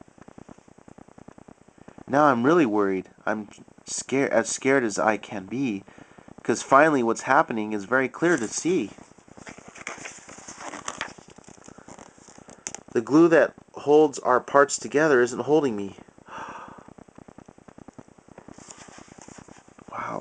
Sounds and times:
Inside, small room: 0:00.0 - 0:20.2
Speech: 0:02.1 - 0:05.8, 0:06.4 - 0:09.0, 0:13.0 - 0:16.0, 0:19.9 - 0:20.2.

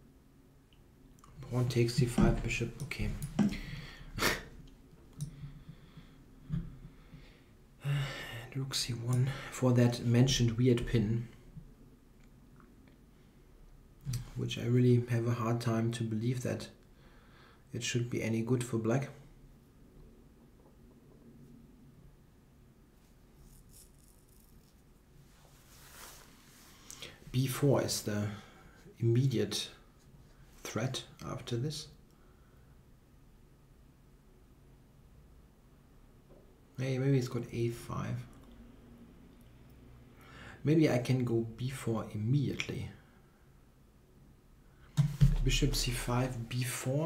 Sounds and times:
Speech: 0:01.4 - 0:03.5, 0:07.8 - 0:11.4, 0:14.2 - 0:16.8, 0:17.7 - 0:19.2, 0:27.3 - 0:29.8, 0:30.6 - 0:32.0, 0:36.8 - 0:38.4, 0:40.6 - 0:43.1, 0:45.3 - 0:47.0.

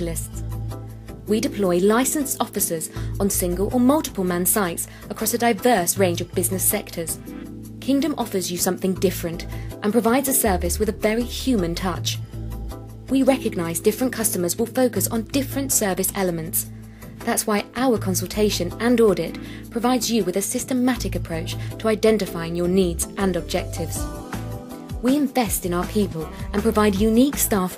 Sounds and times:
Speech: 0:00.0 - 0:00.4, 0:01.3 - 0:07.2, 0:07.8 - 0:12.2, 0:13.1 - 0:24.1, 0:25.0 - 0:27.7
Music: 0:00.0 - 0:27.7.

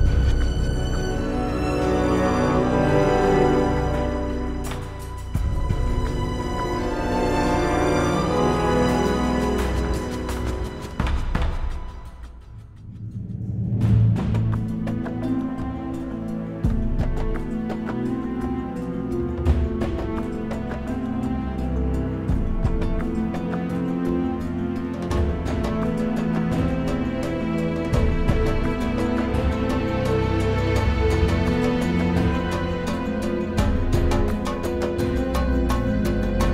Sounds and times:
Music: 0:00.0 - 0:36.5.

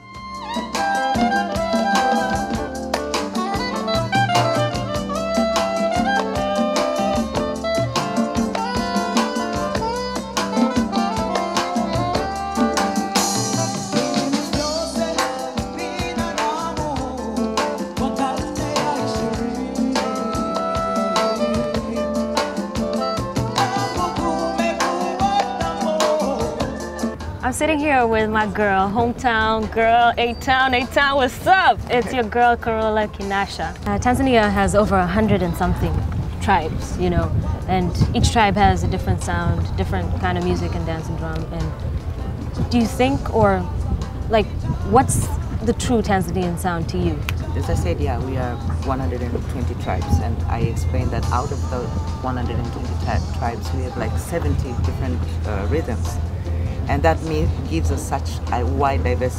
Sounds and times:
Music: 0:00.0 - 0:59.3.

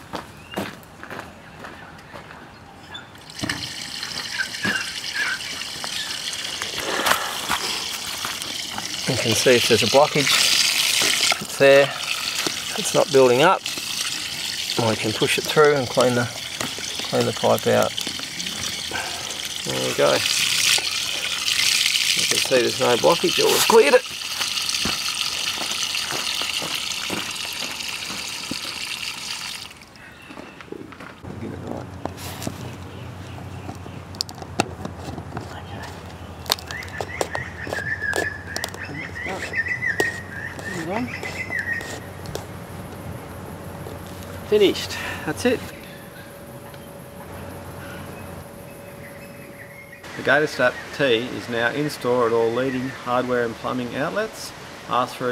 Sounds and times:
Water: 0:03.2 - 0:30.1, 0:44.2 - 0:47.6, 0:48.4 - 0:55.3.

